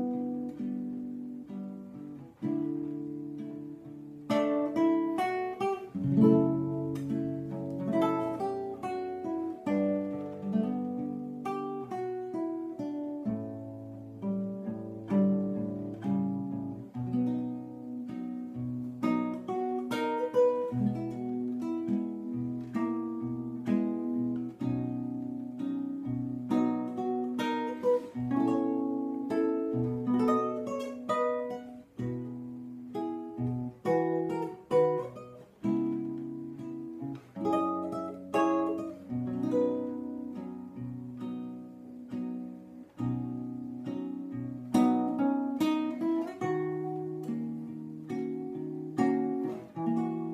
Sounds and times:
Strum: 0.0s - 50.3s.

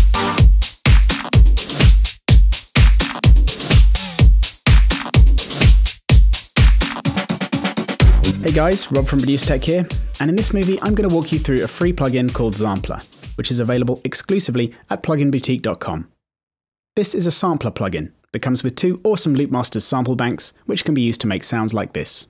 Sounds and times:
Music: 0.0s - 14.0s
Speech: 8.3s - 16.1s, 17.0s - 22.3s.

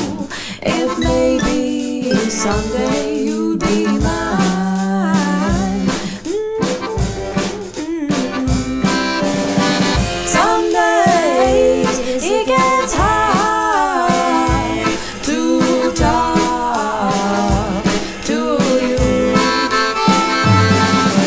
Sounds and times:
Accordion: 0.0s - 21.2s.

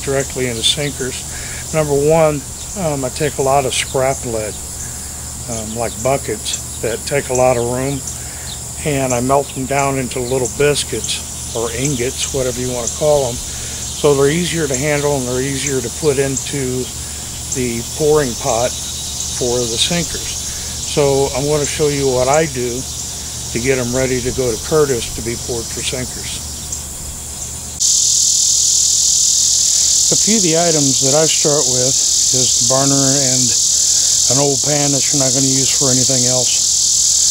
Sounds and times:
Cricket: 0.0s - 37.3s.

